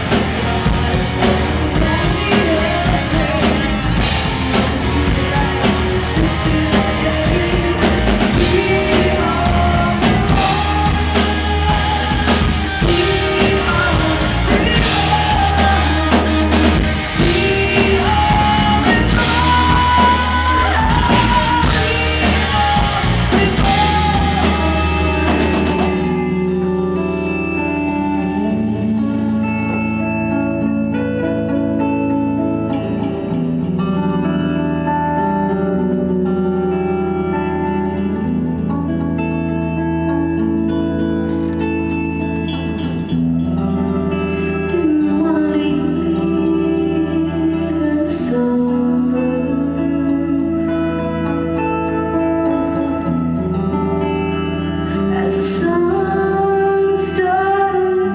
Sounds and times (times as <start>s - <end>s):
Inside, large room or hall: 0.0s - 58.1s
Music: 0.0s - 58.1s
Singing: 1.2s - 26.1s, 55.1s - 58.1s.